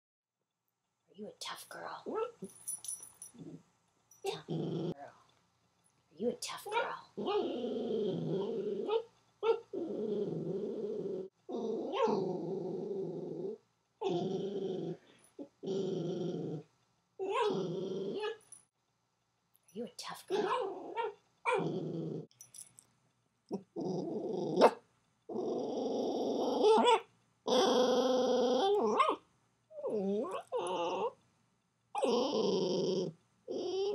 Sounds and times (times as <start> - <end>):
Inside, small room: 0.3 - 33.9
Speech: 1.1 - 2.4, 4.2 - 5.2, 6.2 - 7.2, 19.7 - 20.6.